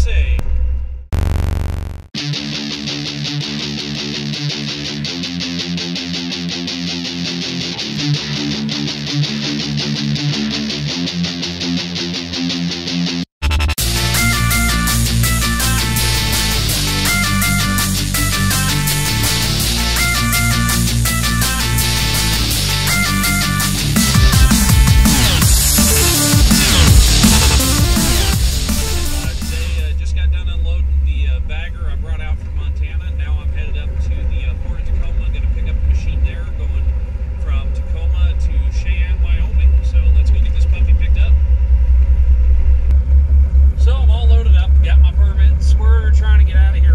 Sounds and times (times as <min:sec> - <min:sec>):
Speech: 0:00.0 - 0:00.4, 0:29.2 - 0:41.4, 0:43.8 - 0:46.9
Truck: 0:29.8 - 0:46.9.